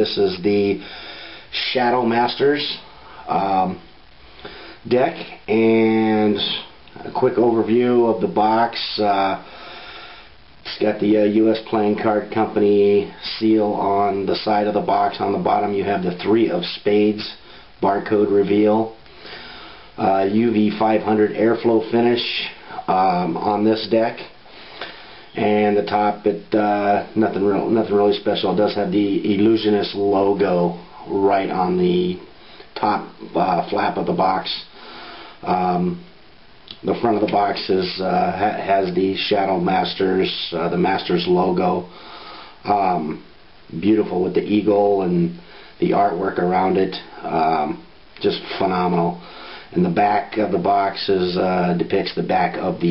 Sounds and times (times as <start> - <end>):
Speech: 0.0 - 0.9, 1.5 - 3.9, 4.8 - 9.5, 10.6 - 19.0, 20.0 - 24.4, 25.4 - 34.7, 35.4 - 36.1, 36.7 - 41.9, 42.6 - 52.9.